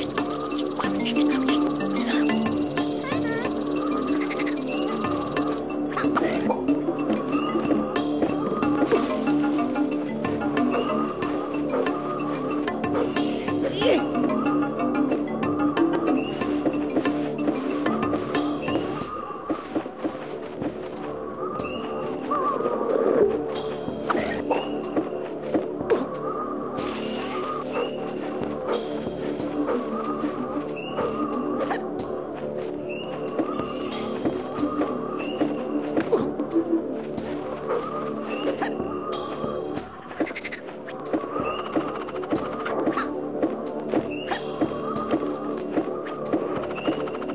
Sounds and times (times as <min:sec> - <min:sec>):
Music: 0:00.0 - 0:47.3
Outside, rural or natural: 0:00.0 - 0:47.3.